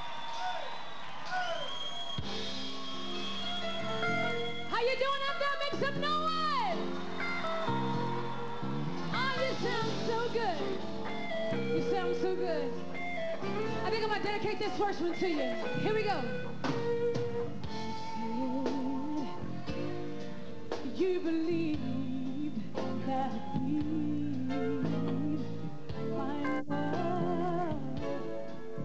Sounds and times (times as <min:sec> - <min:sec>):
Music: 0:00.0 - 0:28.8.